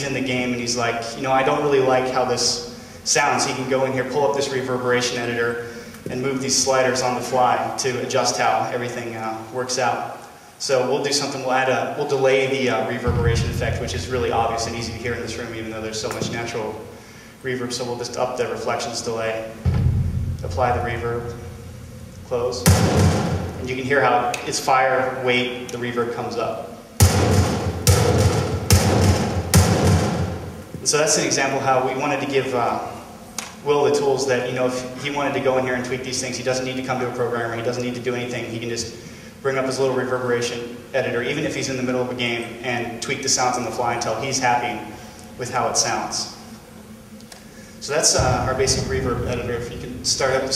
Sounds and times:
Thump, thud: 0:19.7 - 0:20.4, 0:22.7 - 0:23.5, 0:27.0 - 0:30.4.

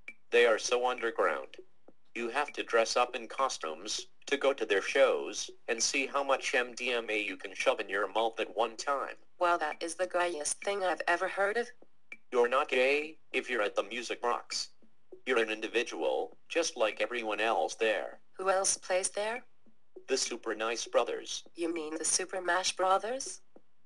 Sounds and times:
Speech: 0:00.4 - 0:01.6, 0:02.2 - 0:11.7, 0:12.4 - 0:14.7, 0:15.3 - 0:19.4, 0:20.1 - 0:23.4.

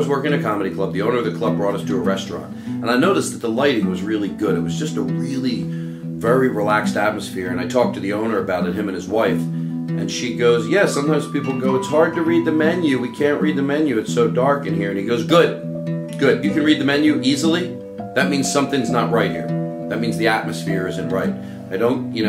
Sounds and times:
Music: 0:00.0 - 0:22.2
Speech: 0:00.0 - 0:22.2.

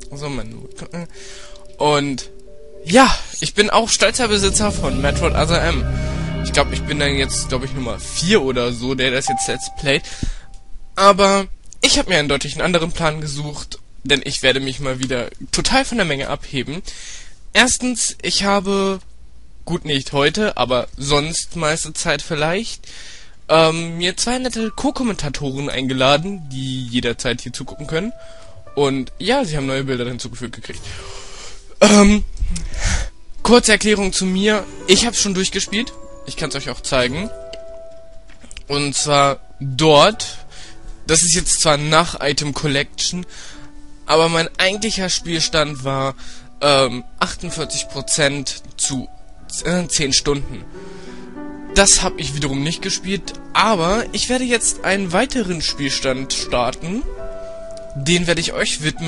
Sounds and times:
Speech: 0:00.0 - 0:10.1, 0:11.0 - 0:16.9, 0:17.6 - 0:19.1, 0:19.7 - 0:22.8, 0:23.5 - 0:28.2, 0:28.8 - 0:30.9, 0:31.8 - 0:37.4, 0:38.6 - 0:40.5, 0:41.1 - 0:43.3, 0:44.1 - 0:50.7, 0:51.7 - 0:57.1, 0:57.9 - 0:59.0.

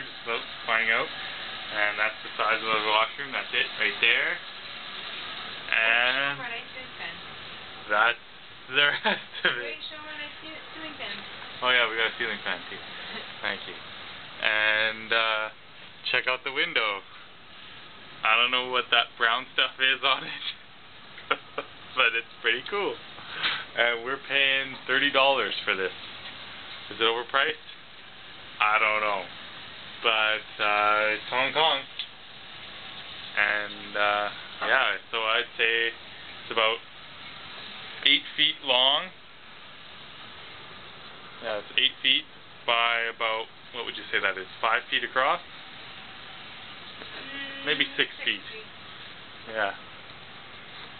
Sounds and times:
Speech: 0:00.0 - 0:01.1, 0:01.7 - 0:04.4, 0:05.7 - 0:07.2, 0:07.9 - 0:13.8, 0:14.4 - 0:17.1, 0:18.2 - 0:20.6, 0:21.9 - 0:23.0, 0:23.8 - 0:25.9, 0:26.9 - 0:27.8, 0:28.6 - 0:29.3, 0:30.0 - 0:31.9, 0:33.4 - 0:36.8, 0:38.0 - 0:39.2, 0:41.4 - 0:45.4, 0:47.2 - 0:48.7, 0:49.5 - 0:49.8.

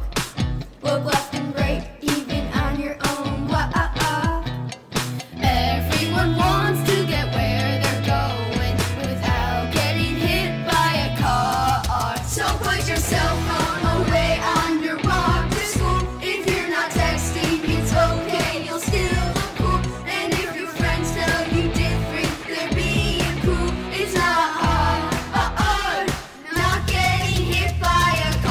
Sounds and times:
Music: 0:00.0 - 0:28.5.

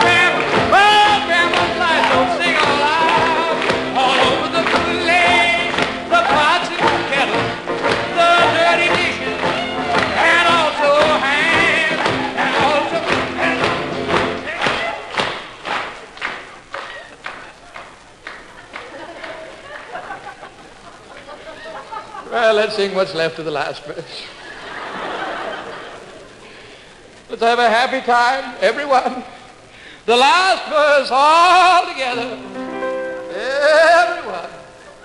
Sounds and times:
Music: 0:00.0 - 0:15.0, 0:31.2 - 0:34.6.

